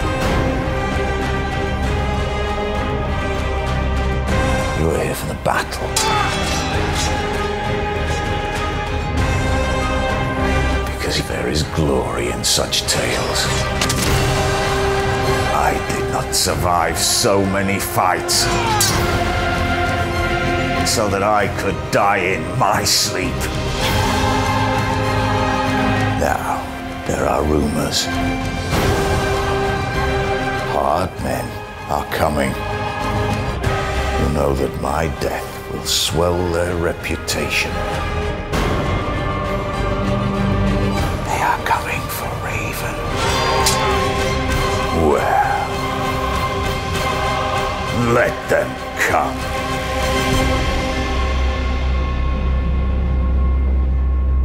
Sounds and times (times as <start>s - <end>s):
Music: 0.0s - 54.4s
Speech: 4.8s - 6.3s, 10.9s - 13.7s, 15.5s - 19.0s, 20.9s - 23.5s, 30.7s - 32.6s, 34.2s - 37.8s, 41.2s - 43.1s, 48.0s - 49.4s.